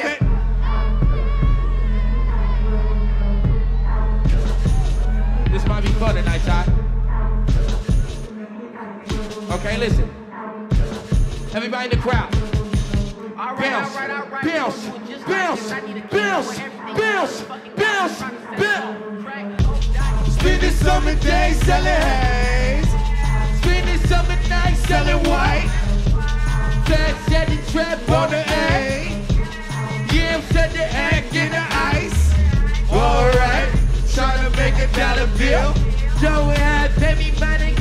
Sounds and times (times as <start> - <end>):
Exciting music: 0.0 - 8.4, 9.0 - 37.8.